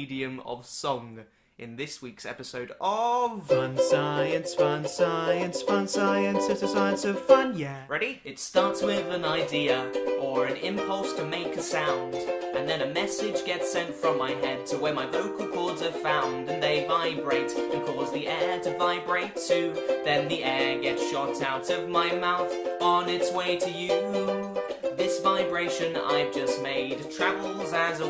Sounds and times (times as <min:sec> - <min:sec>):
Music: 0:03.4 - 0:07.5, 0:08.6 - 0:28.0.